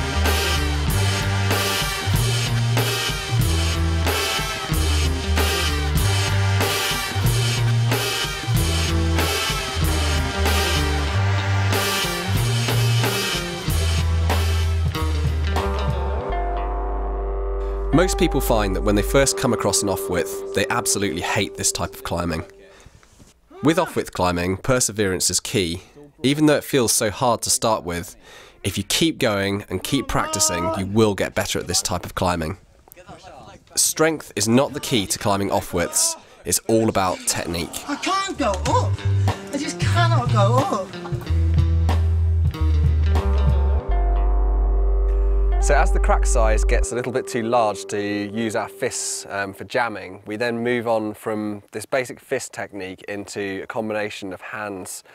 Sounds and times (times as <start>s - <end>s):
Speech: 17.9s - 22.7s, 23.5s - 40.9s, 45.6s - 55.0s.